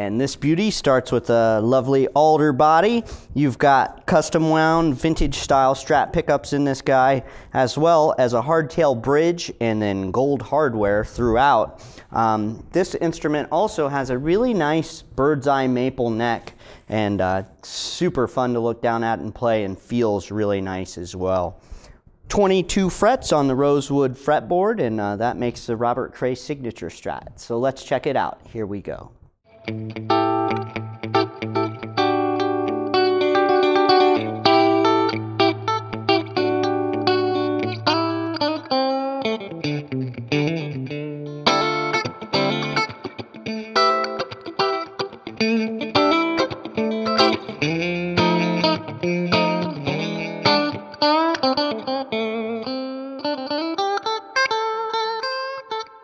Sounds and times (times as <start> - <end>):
Speech: 0.0 - 21.6, 22.3 - 29.2.